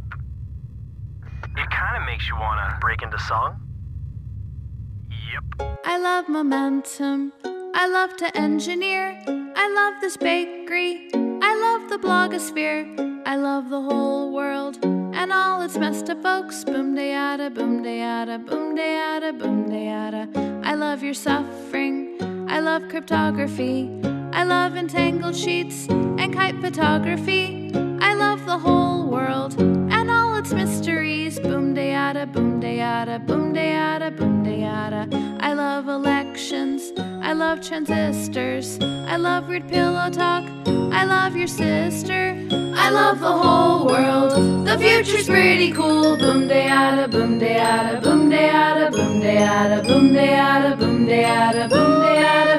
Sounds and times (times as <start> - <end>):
Music for children: 6.5 - 52.5.